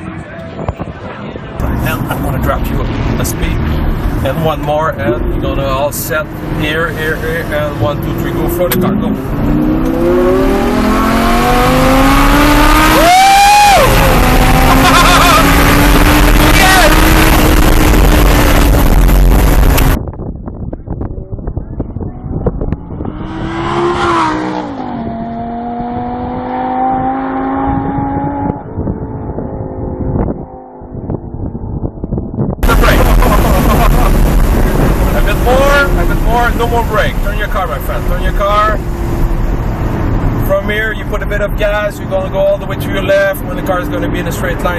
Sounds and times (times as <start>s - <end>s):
Race car, auto racing: 0.0s - 44.7s.